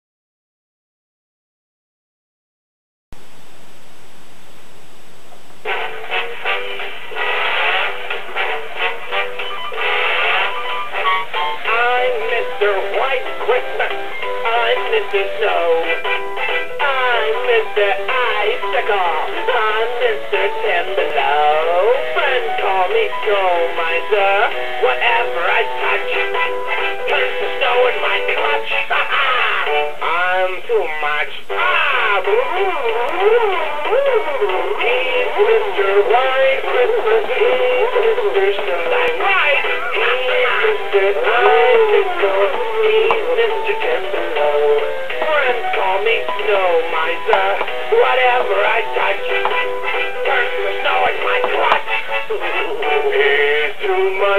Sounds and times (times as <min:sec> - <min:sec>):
Music: 0:05.6 - 0:54.3
Synthetic singing: 0:11.4 - 0:54.3
Male singing: 0:11.6 - 0:16.0, 0:16.8 - 0:54.3.